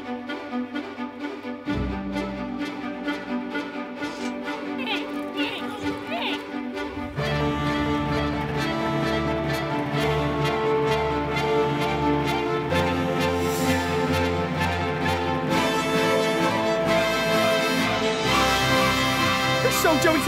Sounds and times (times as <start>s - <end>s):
Music: 0.0s - 20.2s
Speech: 4.8s - 6.4s, 19.6s - 20.2s.